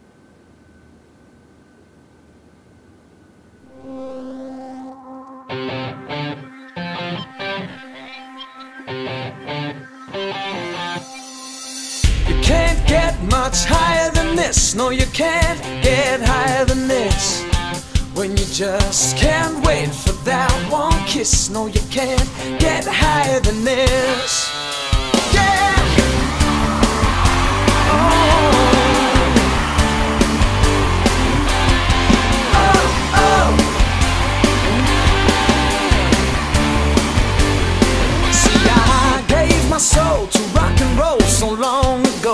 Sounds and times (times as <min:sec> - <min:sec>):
Rock and roll: 0:08.8 - 0:42.3.